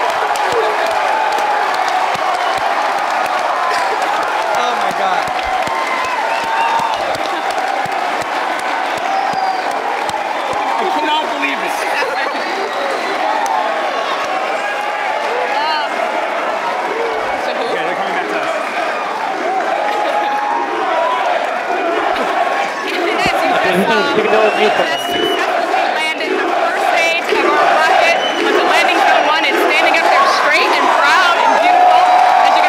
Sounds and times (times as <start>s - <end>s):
Cheering: 0.0s - 32.6s.